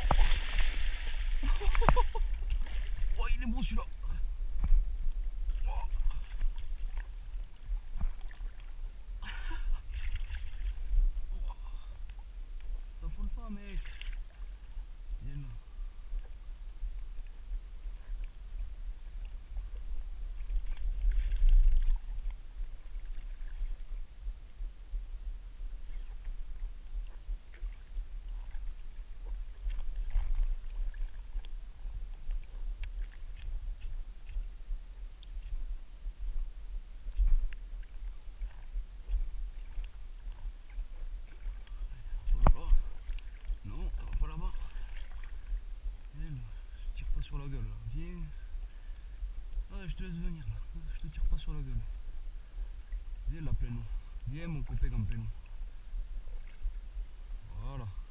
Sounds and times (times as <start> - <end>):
Speech: 3.2 - 4.2, 13.0 - 13.9, 46.2 - 48.4, 49.7 - 51.9, 53.3 - 55.4, 57.5 - 58.0.